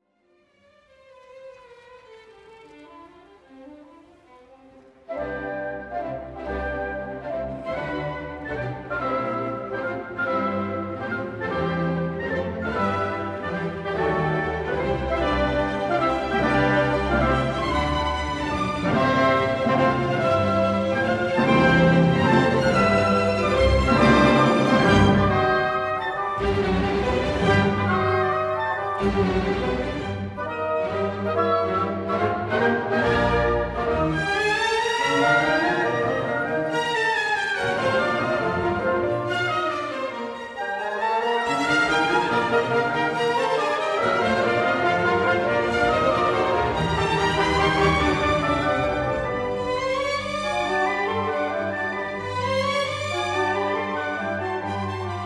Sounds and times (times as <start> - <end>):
Music: 0.0 - 55.2.